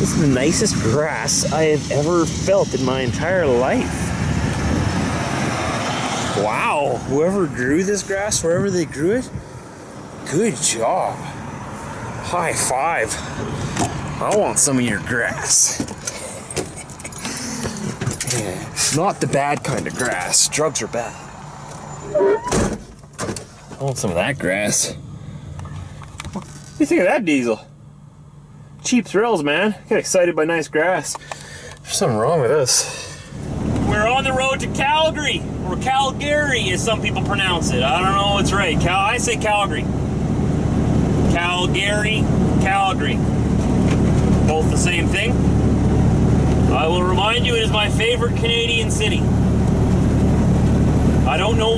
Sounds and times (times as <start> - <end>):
Truck: 0.0 - 26.7, 32.7 - 51.7
Outside, urban or manmade: 0.0 - 51.7
Speech: 23.8 - 25.0, 26.8 - 27.7, 28.8 - 31.2, 33.9 - 39.9, 41.3 - 43.2, 44.5 - 45.4, 46.7 - 49.2, 51.3 - 51.7.